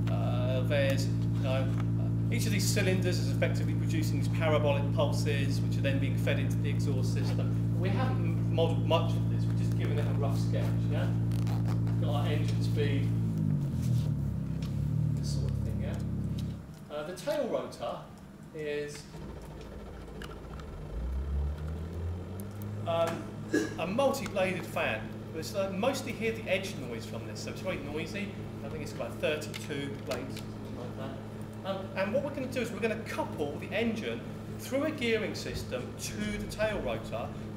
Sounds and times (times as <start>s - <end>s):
Speech: 0.1s - 11.2s, 12.0s - 13.1s, 15.2s - 16.1s, 16.9s - 19.1s, 22.9s - 37.4s.